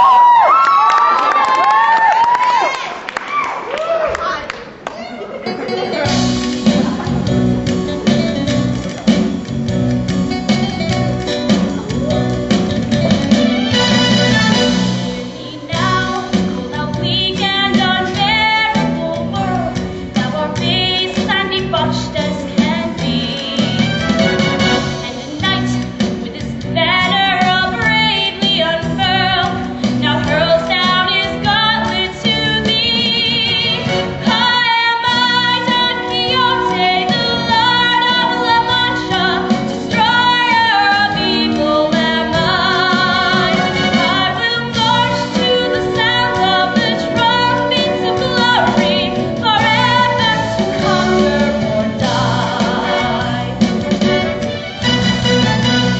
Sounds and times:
Music: 0:05.4 - 0:55.9
Female singing: 0:13.8 - 0:23.8, 0:25.0 - 0:53.7.

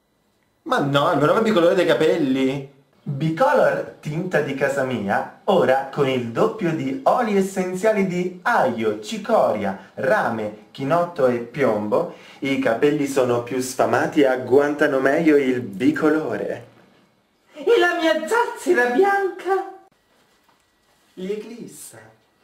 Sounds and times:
Speech: 0:00.6 - 0:16.8, 0:17.5 - 0:19.9, 0:21.2 - 0:22.4.

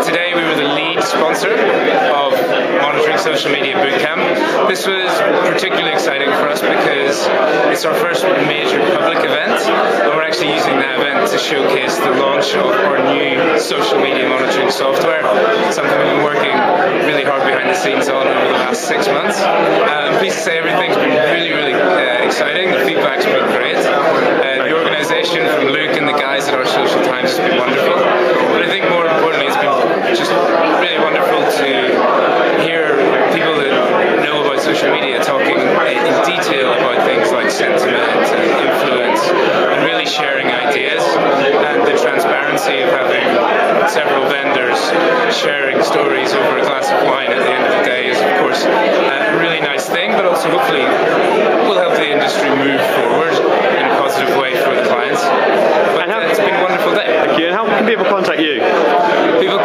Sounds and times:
Speech: 0:00.0 - 0:59.6.

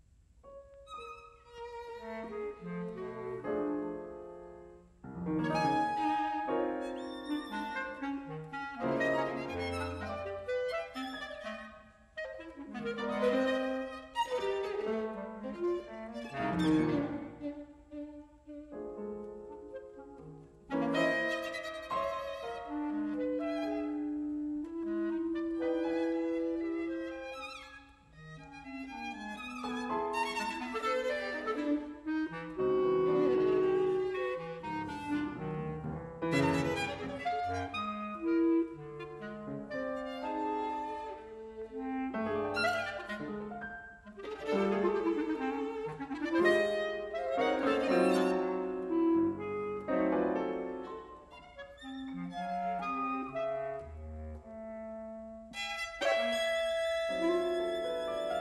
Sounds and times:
Violin, fiddle: 0:00.9 - 0:03.0, 0:05.6 - 0:18.5, 0:24.9 - 0:35.3, 0:36.3 - 0:49.2, 0:50.6 - 0:53.3, 0:55.5 - 0:58.4.

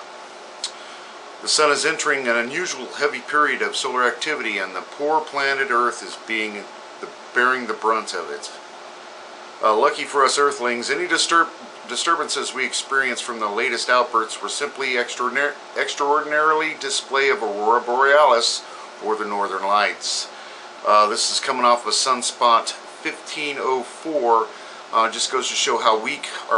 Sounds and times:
Speech: 0:01.4 - 0:08.6, 0:09.6 - 0:26.5.

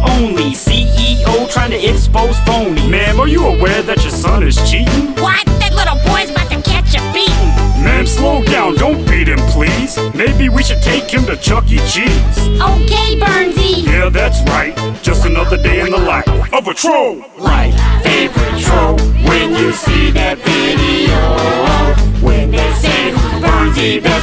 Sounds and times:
Music: 0:00.0 - 0:24.2
Rapping: 0:00.0 - 0:24.2.

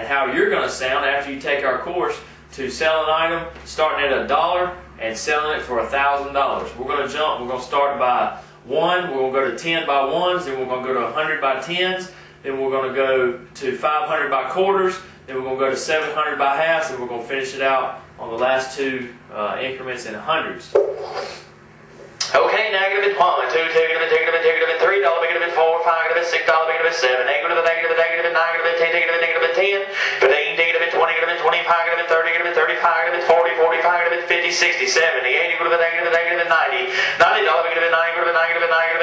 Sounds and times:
Speech: 0:00.0 - 0:20.8, 0:22.2 - 0:39.0.

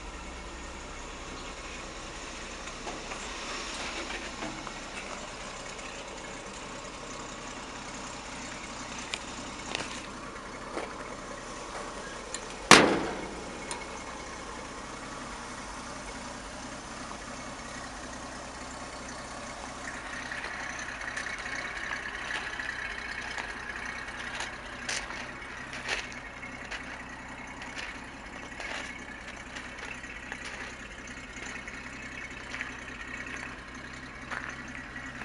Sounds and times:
Truck: 0:00.0 - 0:35.2.

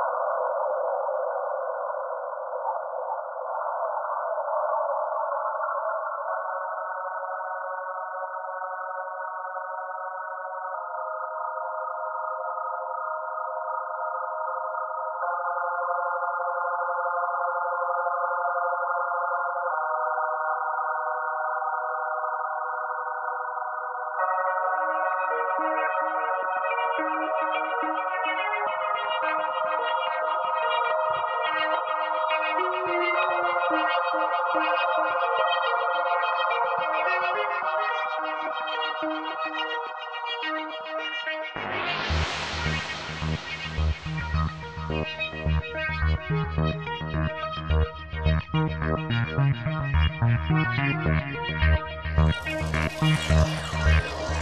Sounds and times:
Music: 0:05.4 - 0:54.4.

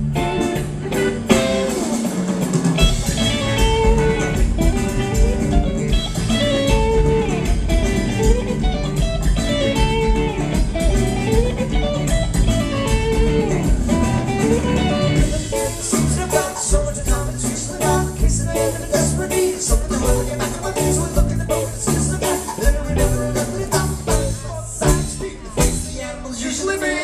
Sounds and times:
Background music: 0:00.0 - 0:27.0.

